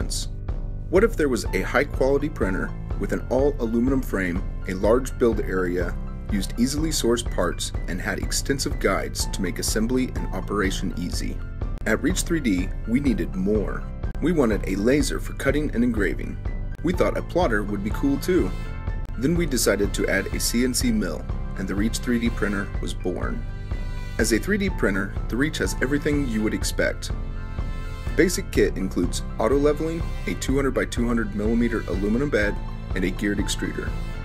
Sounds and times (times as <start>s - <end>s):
Speech: 0.0s - 0.3s, 0.9s - 18.6s, 19.2s - 23.4s, 24.2s - 27.2s, 28.2s - 34.0s
Music: 0.0s - 34.2s.